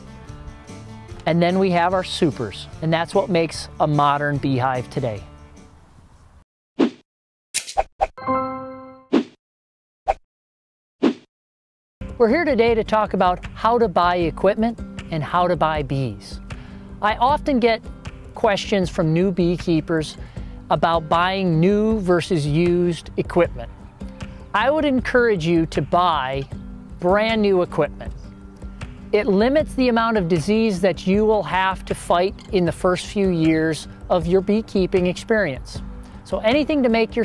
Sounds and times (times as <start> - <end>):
Music: 0.0 - 6.3, 8.2 - 9.0, 12.0 - 37.2
Speech: 1.2 - 5.3, 12.2 - 16.4, 17.0 - 17.8, 18.4 - 23.7, 24.5 - 28.2, 29.2 - 37.2.